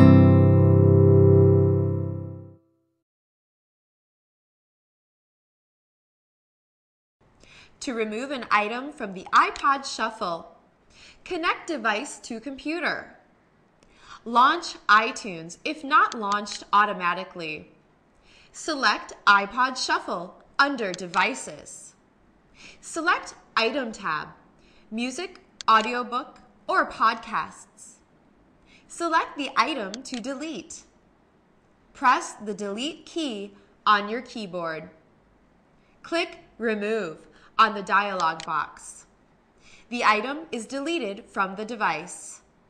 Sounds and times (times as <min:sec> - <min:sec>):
Speech: 0:07.8 - 0:10.6, 0:11.2 - 0:13.2, 0:14.2 - 0:17.8, 0:18.6 - 0:22.0, 0:22.8 - 0:28.0, 0:28.9 - 0:30.9, 0:32.0 - 0:35.0, 0:36.1 - 0:39.1, 0:39.9 - 0:42.5.